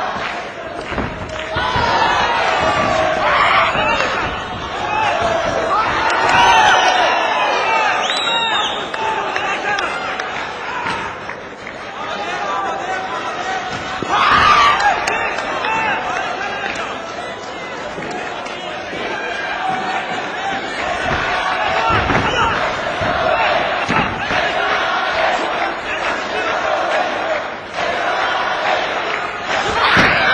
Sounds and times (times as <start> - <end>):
Speech: 1.5 - 27.5.